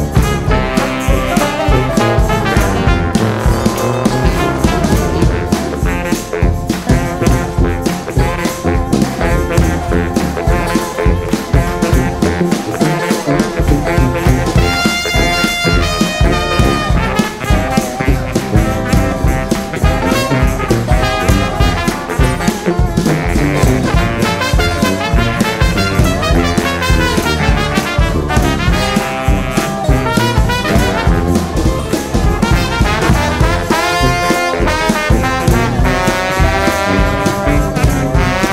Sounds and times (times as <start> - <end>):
Music: 0.0 - 38.5.